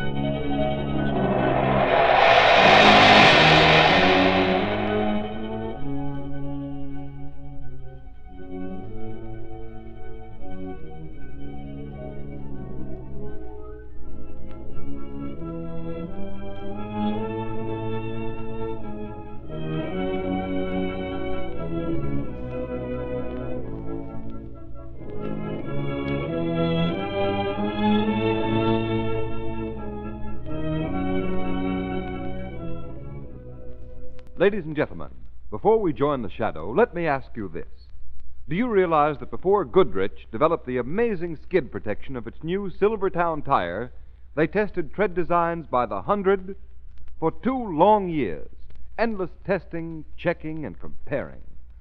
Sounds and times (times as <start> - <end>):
Music: 0.0 - 36.5.